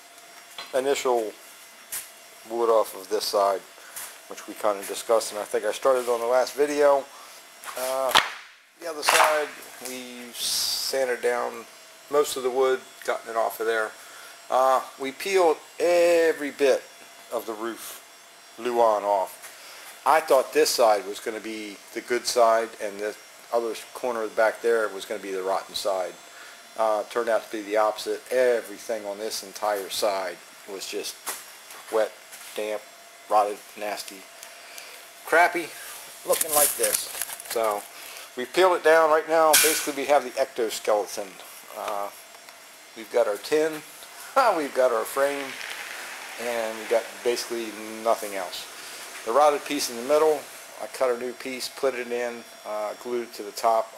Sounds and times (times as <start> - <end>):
Speech: 0.7 - 1.4, 2.5 - 3.7, 4.3 - 7.1, 7.7 - 8.2, 8.8 - 18.0, 18.6 - 19.4, 20.0 - 26.2, 26.8 - 31.2, 31.9 - 34.3, 35.3 - 42.2, 43.0 - 45.6, 46.4 - 53.9.